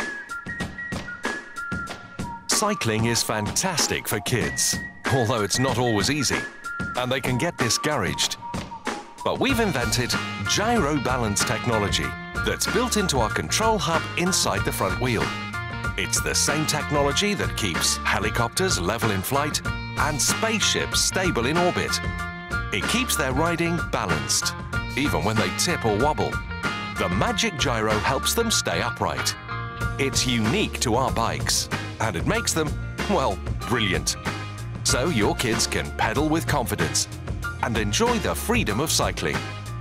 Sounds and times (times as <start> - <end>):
Music: 0.0 - 39.8
Speech: 2.5 - 8.4, 9.2 - 15.3, 16.0 - 22.0, 22.8 - 26.4, 27.0 - 29.4, 30.0 - 34.2, 34.8 - 39.4.